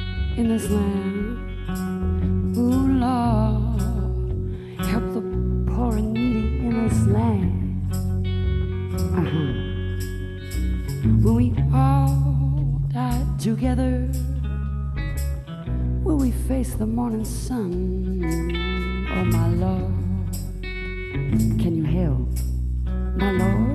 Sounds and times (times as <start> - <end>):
Music: 0.0 - 23.7.